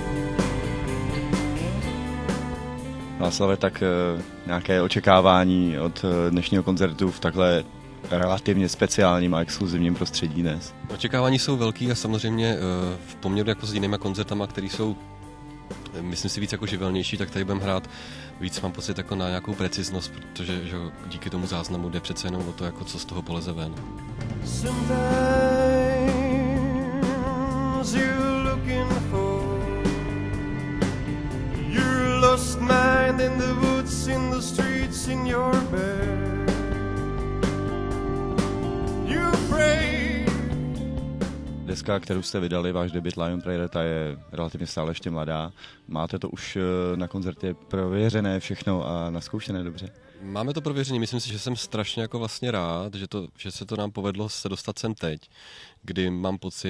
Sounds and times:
Music: 0.0s - 53.2s
Speech: 3.2s - 15.0s, 15.9s - 23.8s, 31.7s - 35.6s, 41.7s - 56.6s.

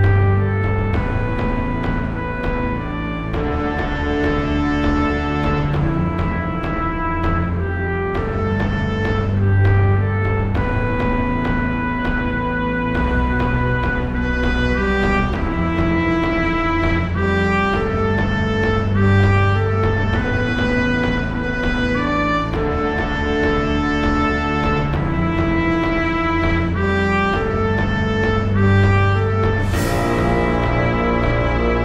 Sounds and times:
Theme music: 0.0s - 31.8s.

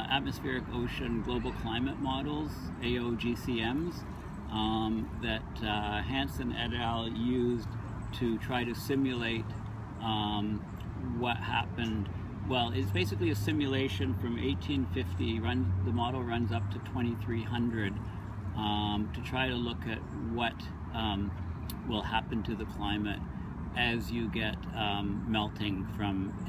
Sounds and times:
Speech: 0.0s - 18.0s, 18.6s - 23.2s, 23.8s - 26.4s.

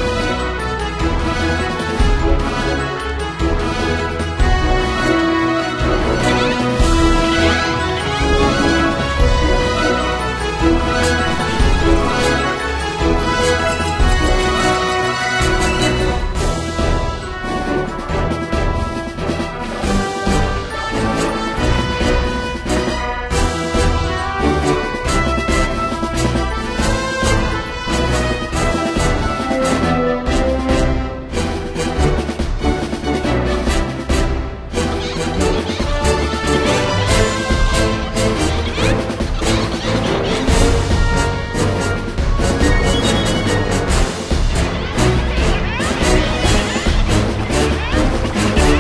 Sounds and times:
Music: 0.0s - 48.8s.

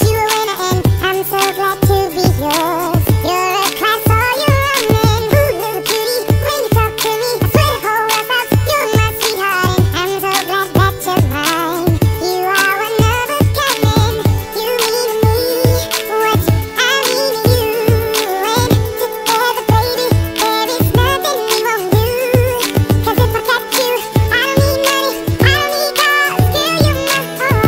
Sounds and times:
Music: 0.0s - 27.6s.

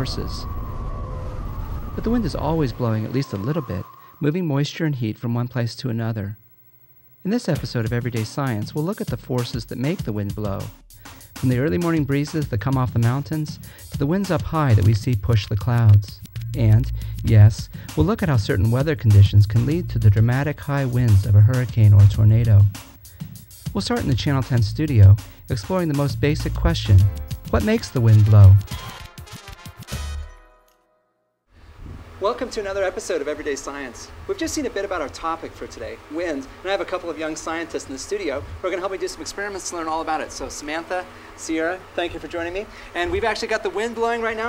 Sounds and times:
Speech: 0.0s - 0.5s, 2.0s - 6.4s, 7.2s - 10.7s, 11.4s - 22.8s, 23.7s - 28.7s, 32.2s - 44.4s
Music: 7.5s - 31.5s.

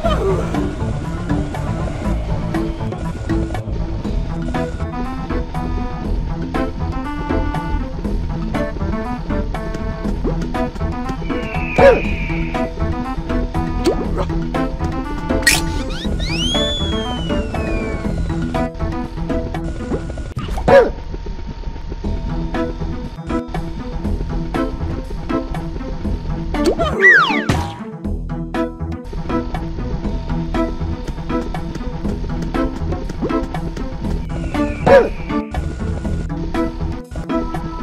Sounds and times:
Music: 0.0s - 37.8s.

